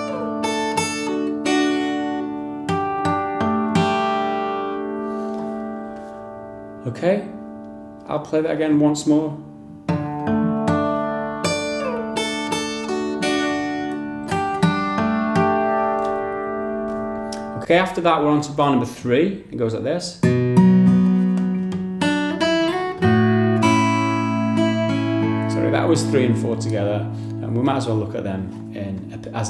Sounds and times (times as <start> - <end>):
Acoustic guitar: 0.0 - 19.4, 20.1 - 29.4.